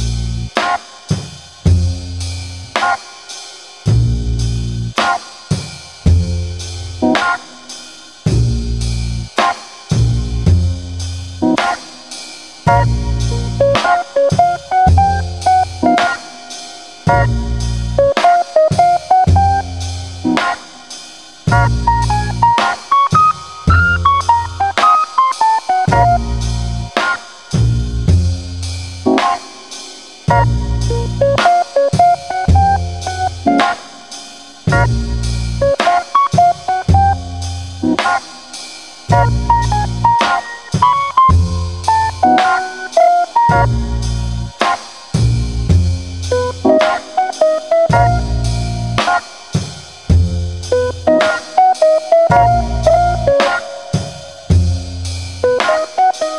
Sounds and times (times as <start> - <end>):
Music: 0.0 - 56.3.